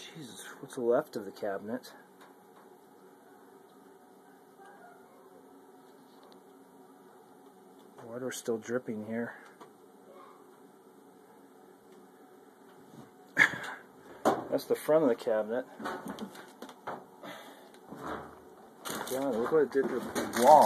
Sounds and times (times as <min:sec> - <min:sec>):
Speech: 0:00.0 - 0:02.1, 0:08.0 - 0:09.5, 0:14.5 - 0:15.7, 0:19.1 - 0:20.6
Inside, small room: 0:00.0 - 0:20.6.